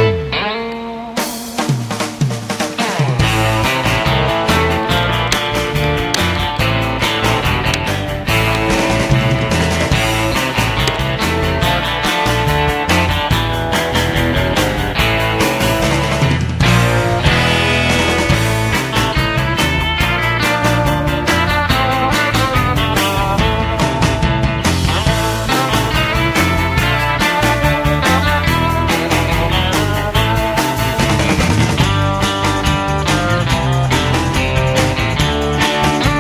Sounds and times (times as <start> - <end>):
Music: 0.0 - 36.2.